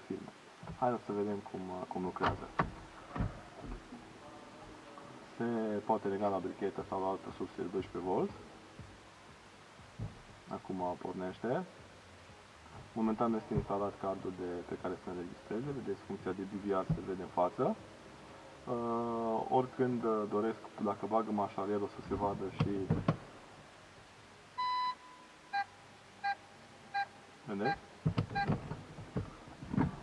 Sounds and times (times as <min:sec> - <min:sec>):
Speech: 0:00.0 - 0:02.6, 0:04.2 - 0:08.4, 0:10.5 - 0:11.7, 0:13.0 - 0:17.8, 0:18.7 - 0:23.1, 0:27.5 - 0:27.8.